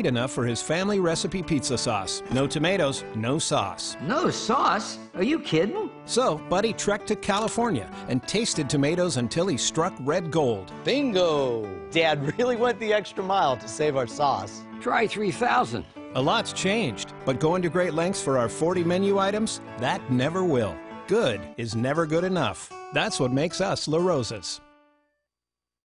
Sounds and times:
Music: 0:00.0 - 0:25.3.

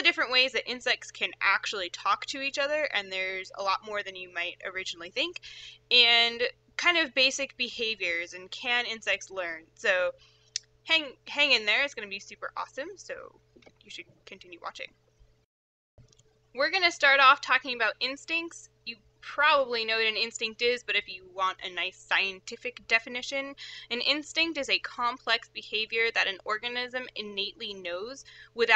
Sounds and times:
Speech: 0:00.0 - 0:10.1, 0:10.9 - 0:13.3, 0:13.9 - 0:14.9, 0:16.6 - 0:28.7.

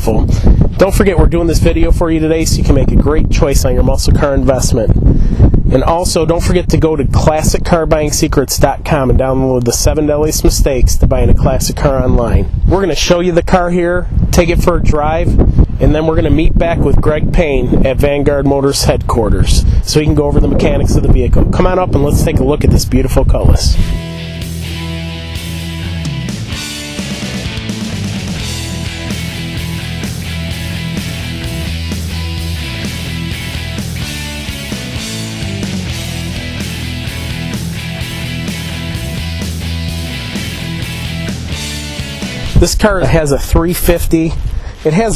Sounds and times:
Speech: 0:00.0 - 0:05.0, 0:05.7 - 0:23.8, 0:42.5 - 0:45.1.

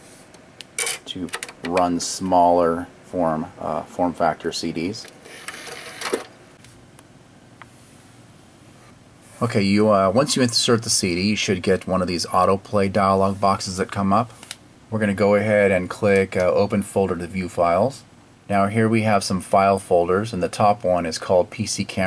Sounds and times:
Speech: 0:01.1 - 0:05.1, 0:09.4 - 0:22.0.

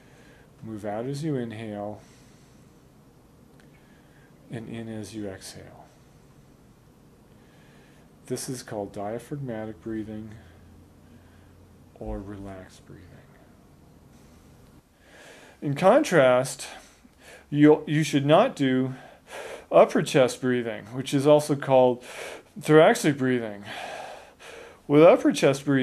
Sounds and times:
Speech: 0:00.6 - 0:02.1, 0:04.5 - 0:05.9, 0:08.3 - 0:10.6, 0:12.0 - 0:13.5, 0:15.6 - 0:16.8, 0:17.5 - 0:19.1, 0:19.7 - 0:22.0, 0:22.6 - 0:23.7, 0:24.9 - 0:25.8
Gasp: 0:15.0 - 0:15.6, 0:19.0 - 0:19.7.

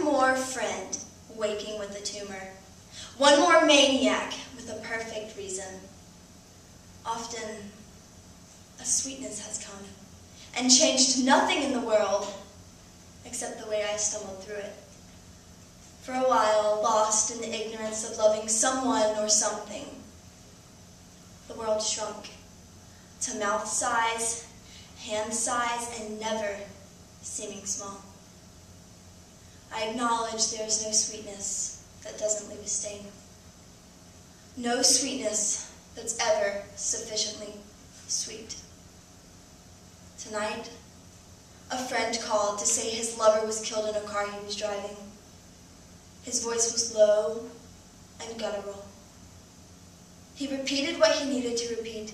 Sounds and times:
Speech: 0:00.0 - 0:05.9, 0:07.1 - 0:07.8, 0:08.8 - 0:12.5, 0:13.2 - 0:14.9, 0:16.0 - 0:20.1, 0:21.5 - 0:22.4, 0:23.2 - 0:28.2, 0:29.7 - 0:33.2, 0:34.6 - 0:38.7, 0:40.2 - 0:40.8, 0:41.7 - 0:45.2, 0:46.2 - 0:47.6, 0:48.2 - 0:49.0, 0:50.4 - 0:52.1.

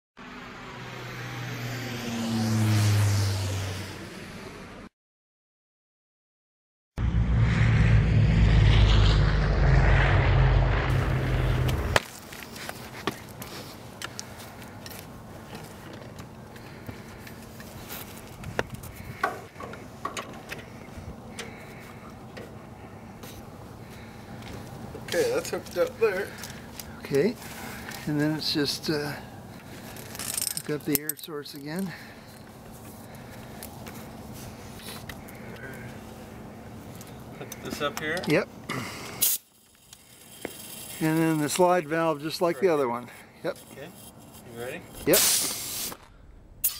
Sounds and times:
Aircraft: 0:00.2 - 0:04.9, 0:07.0 - 0:28.1, 0:31.9 - 0:41.0.

